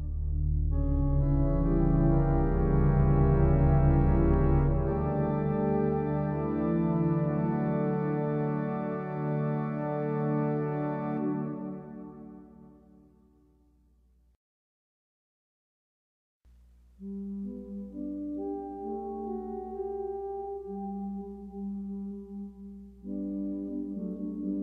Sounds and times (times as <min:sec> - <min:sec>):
Keyboard (musical): 0:00.0 - 0:13.8, 0:16.9 - 0:24.6.